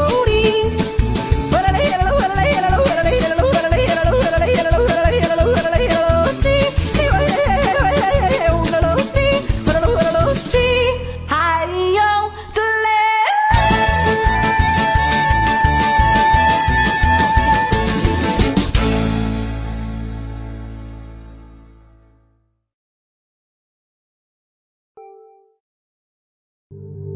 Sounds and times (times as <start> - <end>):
Music: 0.0 - 22.7, 25.0 - 25.6, 26.7 - 27.1
Yodeling: 1.6 - 10.8, 13.0 - 18.1.